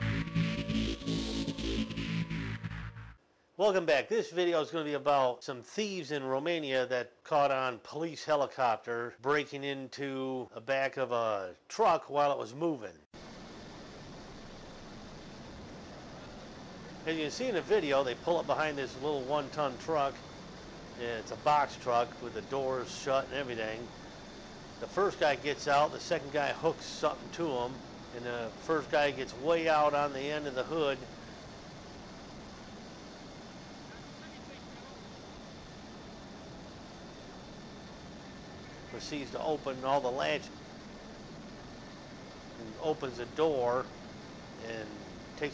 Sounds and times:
Speech: 0:03.6 - 0:13.0, 0:17.1 - 0:20.2, 0:21.0 - 0:23.9, 0:24.8 - 0:31.1, 0:38.9 - 0:40.5, 0:42.6 - 0:43.9, 0:44.6 - 0:45.5.

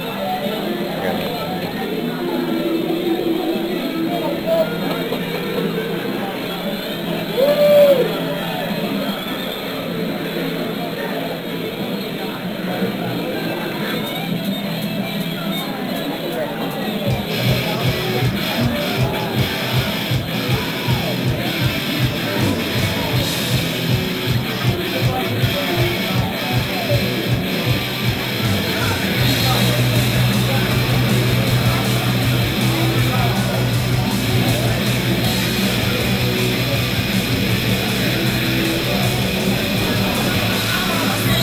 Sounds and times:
Guitar: 0:00.0 - 0:41.4
Speech: 0:00.0 - 0:41.4.

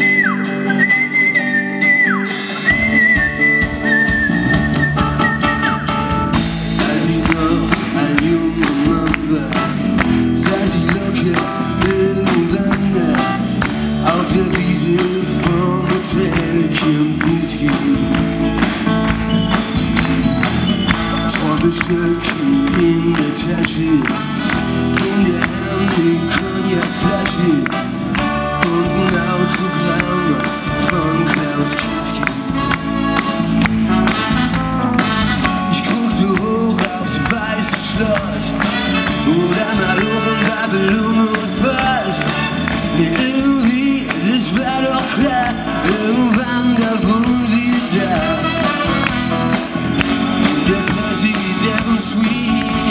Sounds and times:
Music: 0:00.0 - 0:52.9.

